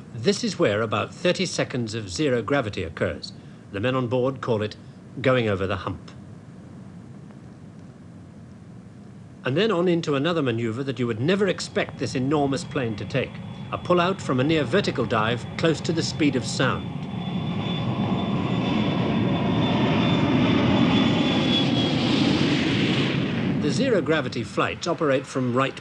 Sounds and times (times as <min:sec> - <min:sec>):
Speech: 0:00.2 - 0:06.2, 0:09.5 - 0:16.9, 0:23.6 - 0:25.8
Aircraft: 0:11.2 - 0:25.8.